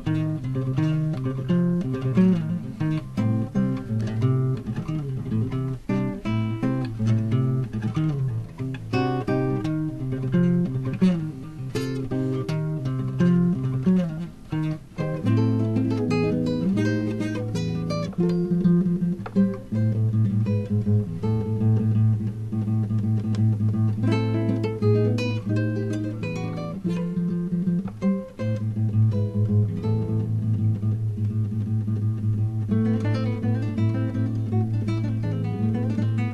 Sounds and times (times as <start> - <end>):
Strum: 0.0 - 36.3.